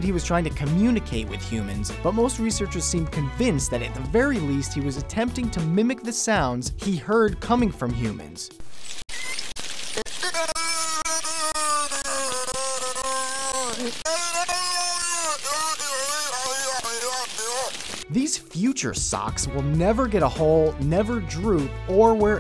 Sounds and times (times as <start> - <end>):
Speech: 0.0 - 8.5, 13.8 - 22.4
Music: 0.0 - 8.6, 16.6 - 22.4.